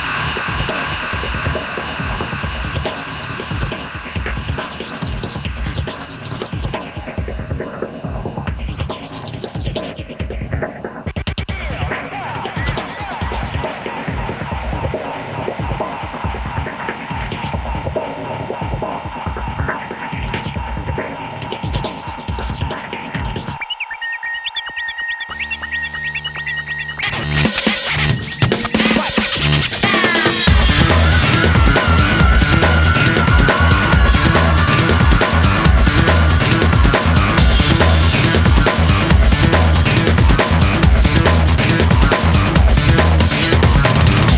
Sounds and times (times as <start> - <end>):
Music: 0.0 - 44.3.